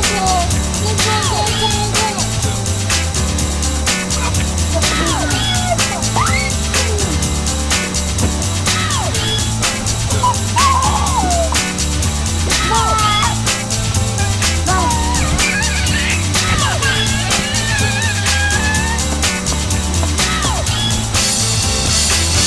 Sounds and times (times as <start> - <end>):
Speech: 0.0 - 2.4, 4.7 - 7.0, 12.6 - 13.4, 14.7 - 15.3
Music: 0.0 - 22.4.